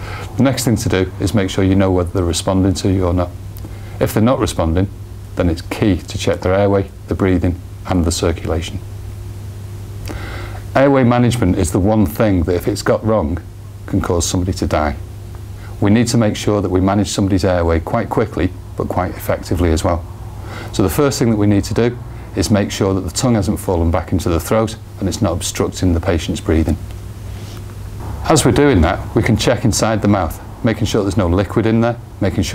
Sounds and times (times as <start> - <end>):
Speech: 0.3 - 3.4, 4.0 - 8.8, 10.7 - 15.0, 15.8 - 20.0, 20.7 - 26.8, 28.2 - 32.5.